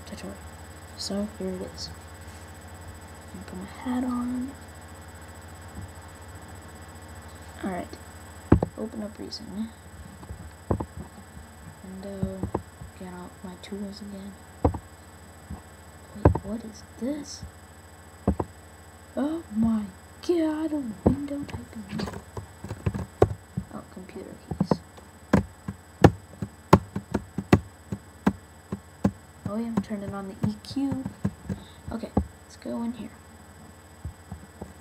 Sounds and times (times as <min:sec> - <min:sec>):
Speech: 0:00.0 - 0:00.4, 0:01.0 - 0:02.0, 0:03.3 - 0:04.6, 0:07.4 - 0:08.0, 0:08.7 - 0:09.8, 0:11.8 - 0:14.4, 0:16.2 - 0:17.5, 0:19.2 - 0:22.2, 0:23.7 - 0:24.8, 0:29.5 - 0:33.2.